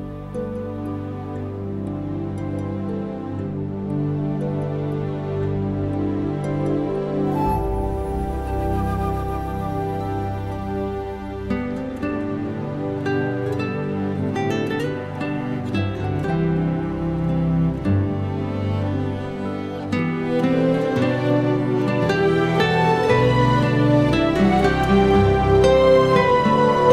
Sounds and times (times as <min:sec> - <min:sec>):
Music: 0:00.0 - 0:26.9.